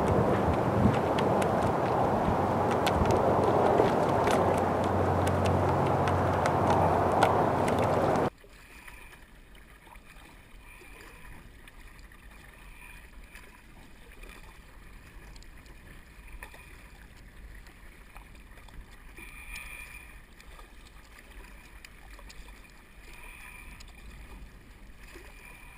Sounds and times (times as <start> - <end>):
Rowboat, canoe, kayak: 0.0 - 25.7.